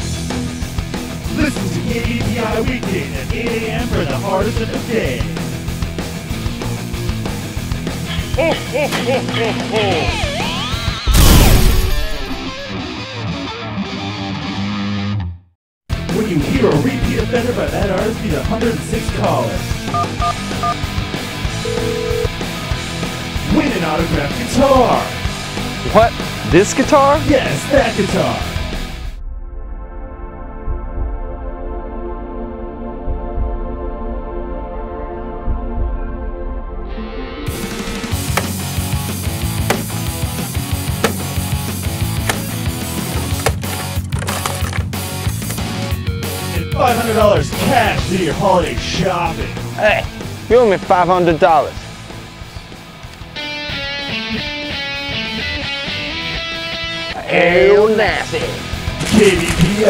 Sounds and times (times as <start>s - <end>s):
Speech: 1.3s - 1.8s, 9.4s - 10.3s, 16.1s - 19.7s, 23.5s - 25.2s, 25.9s - 28.5s, 46.6s - 51.8s, 57.2s - 59.8s.